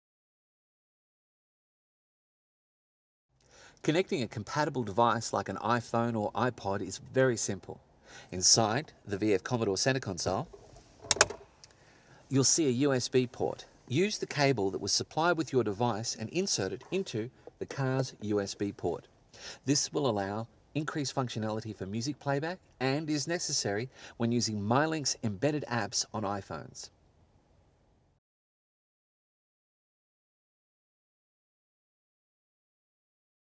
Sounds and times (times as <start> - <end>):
Speech: 3.8 - 10.5, 12.3 - 27.0.